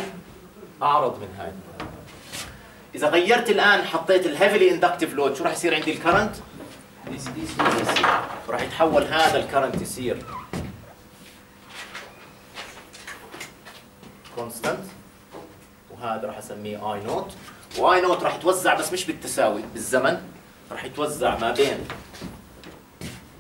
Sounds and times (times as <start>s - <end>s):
Speech: 0.0s - 2.1s, 2.9s - 10.3s, 14.3s - 15.0s, 15.9s - 22.0s.